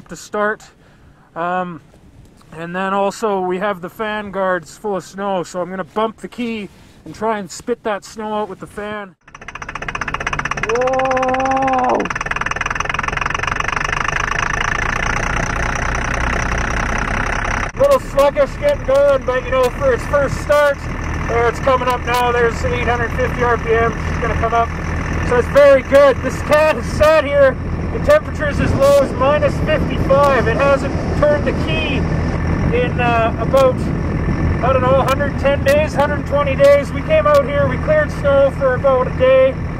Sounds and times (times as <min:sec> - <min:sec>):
Speech: 0:00.0 - 0:00.8, 0:01.4 - 0:01.8, 0:02.5 - 0:09.2, 0:17.8 - 0:24.7, 0:25.3 - 0:32.0, 0:32.7 - 0:33.9, 0:34.6 - 0:39.6.